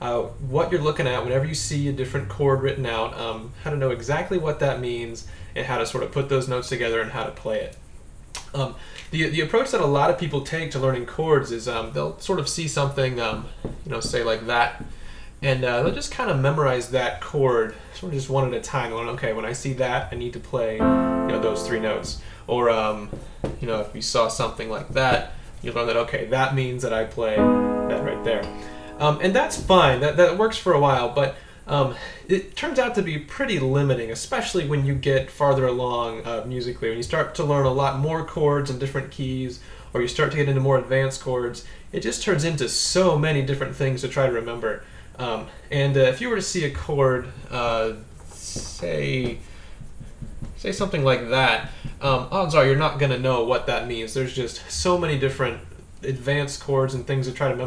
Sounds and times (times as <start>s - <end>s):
Speech: 0.0s - 7.8s, 8.4s - 49.4s, 50.6s - 57.6s
Music: 20.8s - 22.3s, 27.4s - 30.1s.